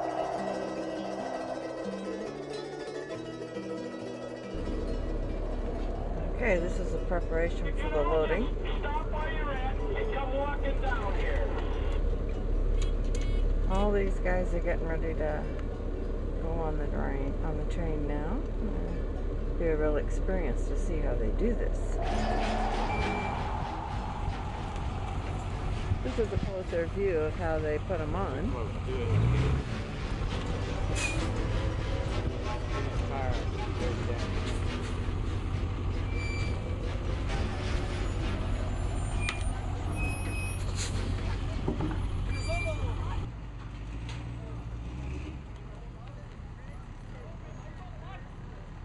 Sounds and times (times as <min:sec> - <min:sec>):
Music: 0:00.0 - 0:12.4, 0:21.9 - 0:39.6
Vehicle: 0:00.0 - 0:48.8
Speech: 0:16.4 - 0:18.8, 0:19.6 - 0:22.0, 0:26.0 - 0:29.2, 0:32.5 - 0:34.5.